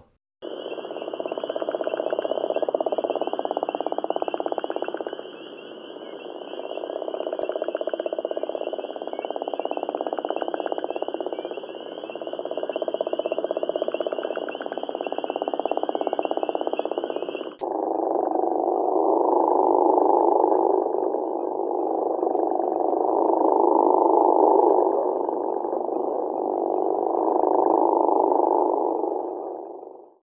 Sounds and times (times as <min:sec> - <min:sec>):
Frog: 0:00.4 - 0:30.2.